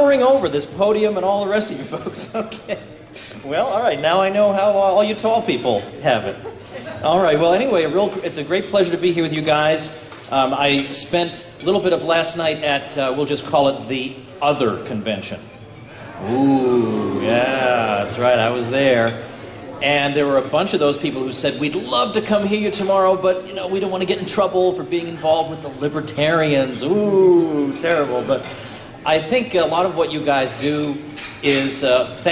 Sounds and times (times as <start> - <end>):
Male speech, man speaking: 0.0 - 2.4, 3.4 - 6.4, 7.0 - 15.5, 16.2 - 19.2, 19.8 - 32.3.